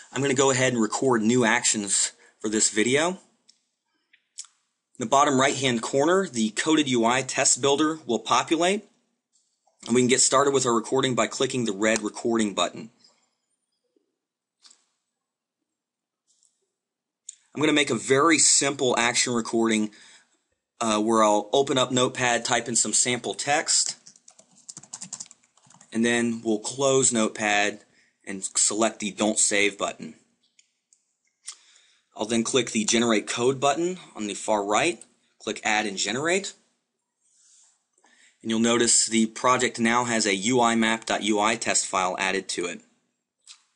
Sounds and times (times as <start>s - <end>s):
Speech: 0.0s - 3.3s, 5.0s - 8.9s, 9.8s - 13.0s, 17.3s - 20.0s, 20.8s - 24.1s, 25.9s - 30.2s, 32.2s - 36.7s, 38.4s - 42.9s.